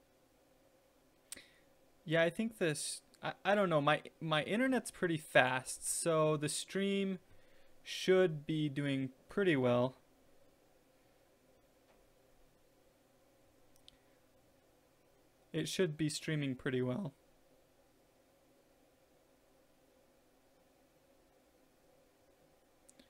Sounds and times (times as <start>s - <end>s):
Inside, small room: 0.0s - 23.0s
Speech: 2.1s - 7.2s, 7.9s - 10.0s, 15.6s - 17.2s.